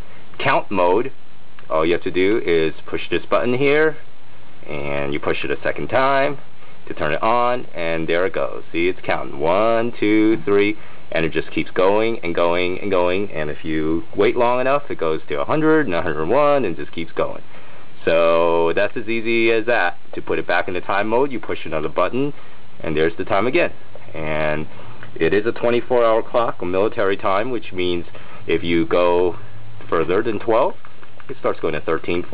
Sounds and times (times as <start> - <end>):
Speech: 0.4 - 4.0, 4.6 - 32.3.